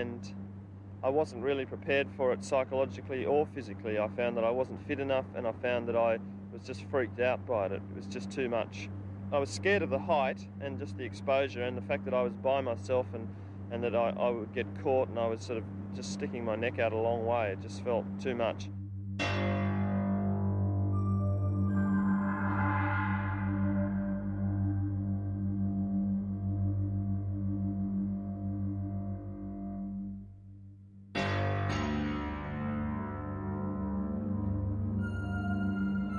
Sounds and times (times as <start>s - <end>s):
Speech: 0.0s - 0.4s, 1.0s - 18.7s.